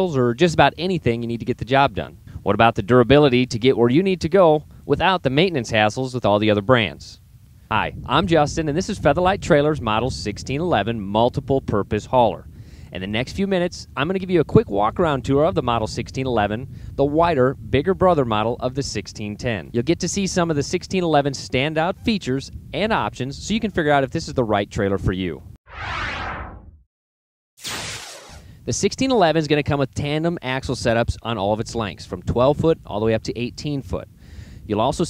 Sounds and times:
Speech: 0.0s - 25.4s, 28.7s - 34.1s, 34.7s - 35.0s.

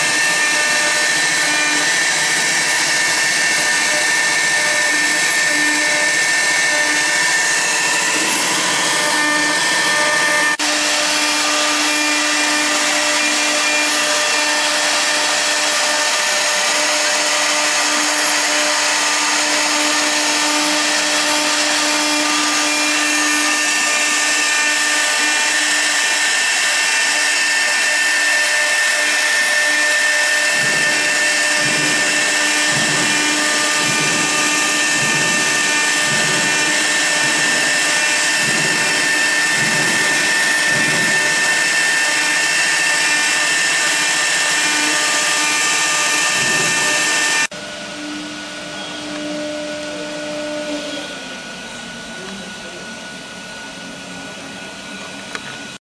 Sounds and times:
Inside, large room or hall: 0.0s - 55.8s
Vacuum cleaner: 0.0s - 55.8s.

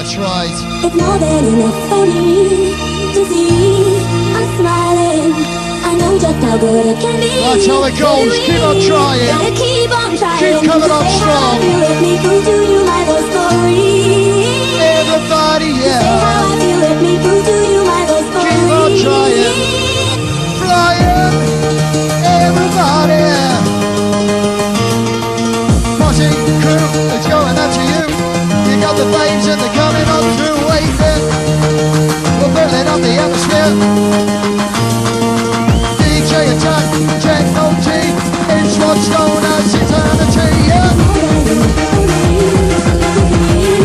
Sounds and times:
Techno: 0.0s - 43.8s.

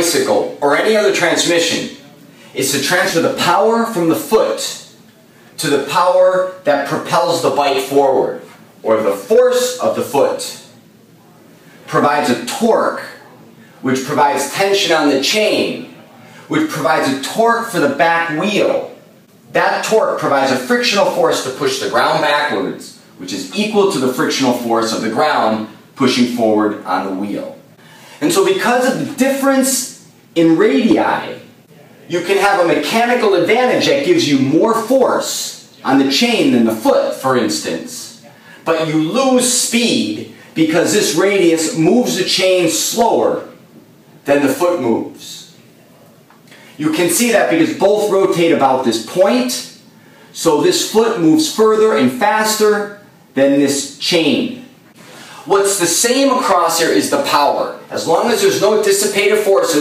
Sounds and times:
Speech: 0.0s - 43.6s, 44.2s - 59.8s.

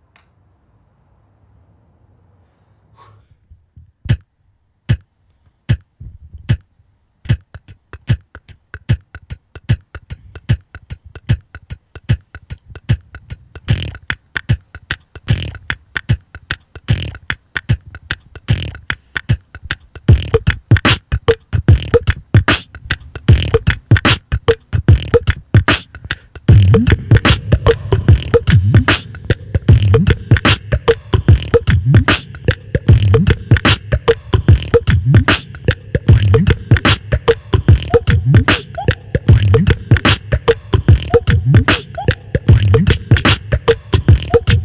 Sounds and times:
Music: 4.9s - 5.1s, 5.7s - 44.6s.

